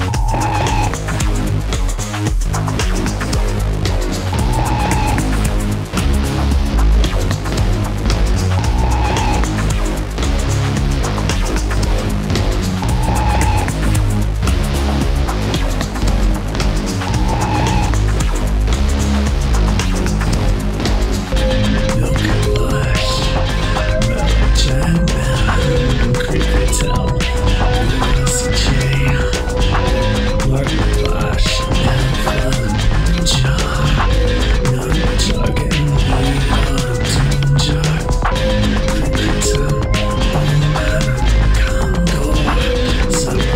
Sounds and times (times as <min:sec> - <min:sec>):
Soundtrack music: 0:00.0 - 0:43.5.